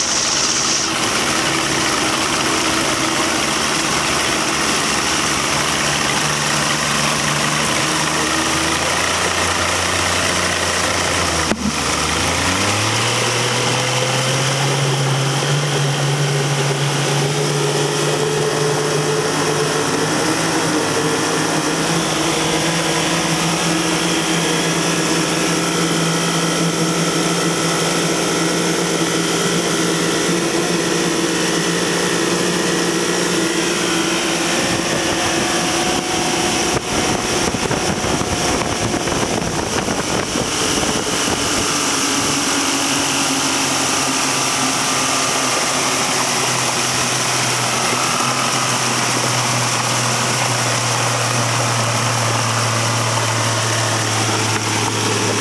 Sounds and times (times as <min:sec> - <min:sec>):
Motorboat, speedboat: 0:00.0 - 0:55.4.